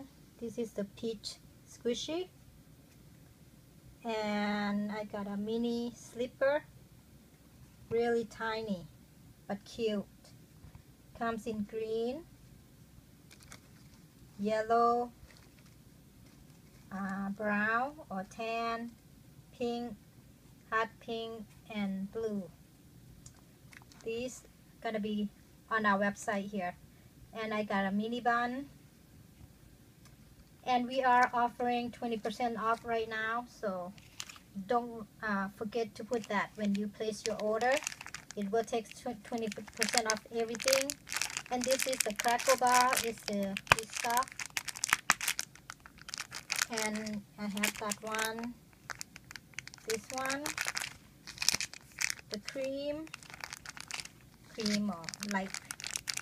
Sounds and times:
Speech: 0:00.0 - 0:02.3, 0:04.0 - 0:06.7, 0:07.9 - 0:08.9, 0:09.5 - 0:10.2, 0:11.2 - 0:12.3, 0:14.4 - 0:15.2, 0:16.9 - 0:19.0, 0:19.6 - 0:20.0, 0:20.7 - 0:22.6, 0:24.0 - 0:26.8, 0:27.4 - 0:28.7, 0:30.6 - 0:34.0, 0:34.6 - 0:44.3, 0:46.7 - 0:48.6, 0:49.8 - 0:50.6, 0:52.3 - 0:53.1, 0:54.5 - 0:55.5.

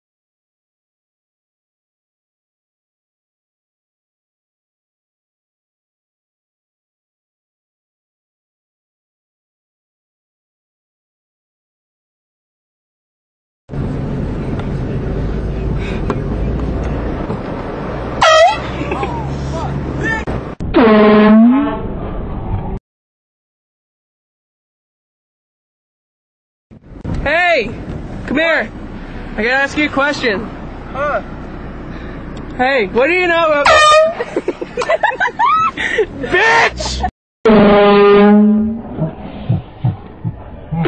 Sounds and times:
Outside, urban or manmade: 0:13.7 - 0:22.8, 0:26.7 - 0:40.8
Air horn, truck horn: 0:18.2 - 0:18.8, 0:20.7 - 0:21.8, 0:33.6 - 0:34.2, 0:37.5 - 0:38.8
Speech: 0:27.2 - 0:28.7, 0:29.4 - 0:31.3, 0:32.6 - 0:33.7.

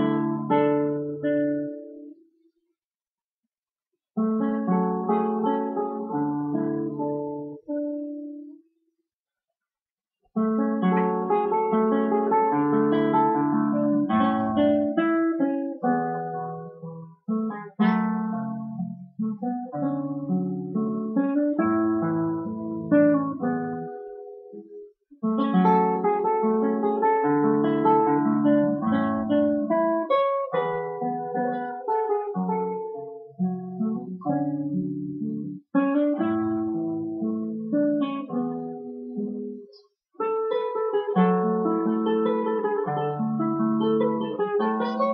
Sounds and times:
Strum: 0:35.2 - 0:45.1.

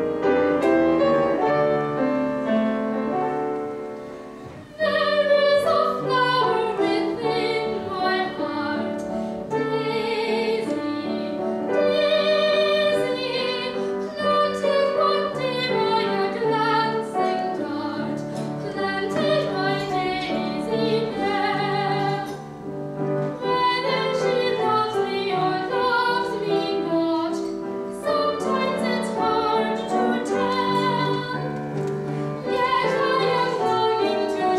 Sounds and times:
Music: 0:00.0 - 0:34.5.

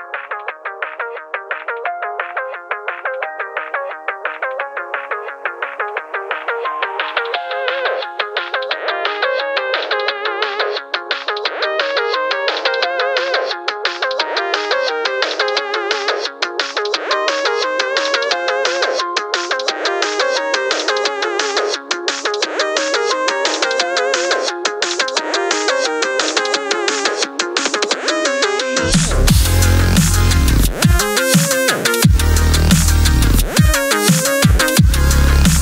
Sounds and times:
Music: 0:00.0 - 0:35.6.

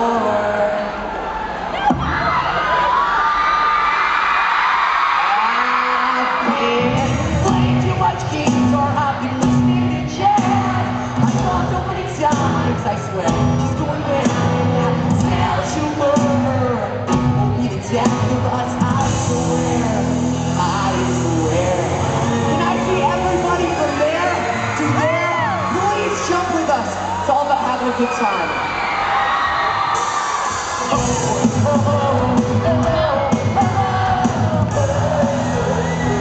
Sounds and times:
Music: 0:06.4 - 0:36.2.

